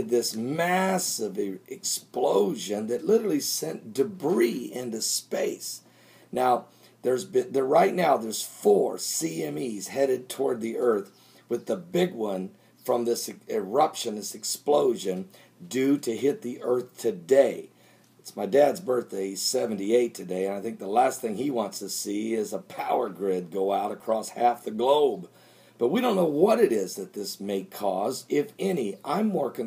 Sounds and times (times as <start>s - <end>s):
Speech: 0.0s - 5.8s, 6.4s - 29.6s.